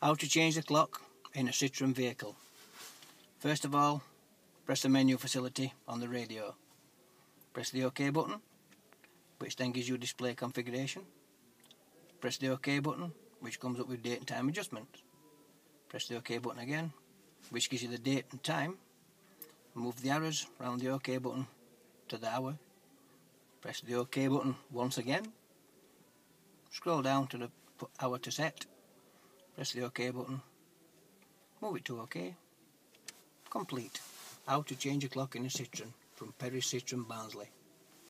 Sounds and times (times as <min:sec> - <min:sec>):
Speech: 0:00.0 - 0:02.4, 0:03.4 - 0:06.6, 0:07.5 - 0:08.4, 0:09.4 - 0:11.1, 0:11.8 - 0:15.1, 0:15.8 - 0:18.8, 0:19.8 - 0:22.7, 0:23.6 - 0:25.4, 0:26.7 - 0:28.7, 0:29.5 - 0:30.6, 0:31.6 - 0:32.5, 0:33.4 - 0:37.6.